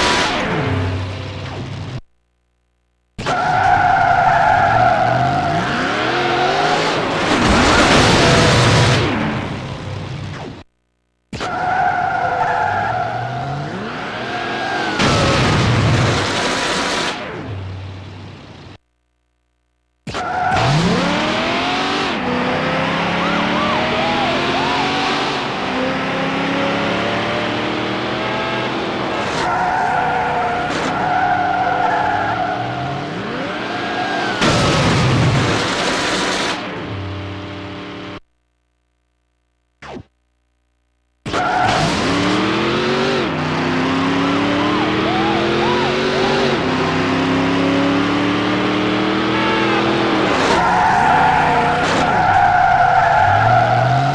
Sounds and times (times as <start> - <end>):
Skidding: 3.2 - 10.6, 11.4 - 18.7, 20.1 - 38.1, 41.3 - 54.1.